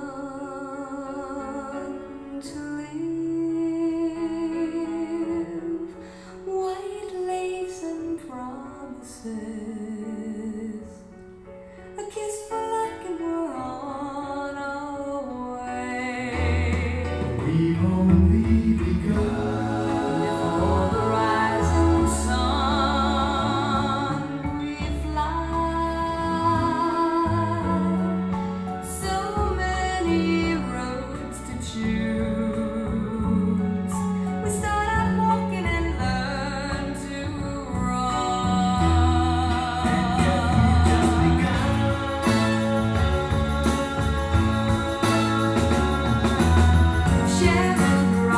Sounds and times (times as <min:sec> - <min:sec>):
Music: 0:00.0 - 0:48.3.